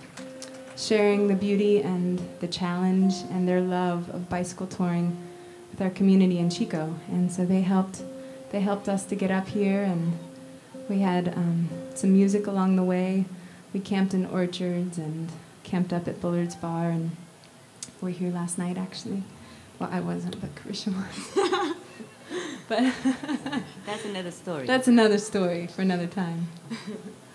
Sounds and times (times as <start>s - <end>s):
Music: 0.0s - 21.1s
Speech: 0.8s - 5.1s, 10.9s - 17.2s, 17.9s - 21.2s, 23.9s - 26.6s.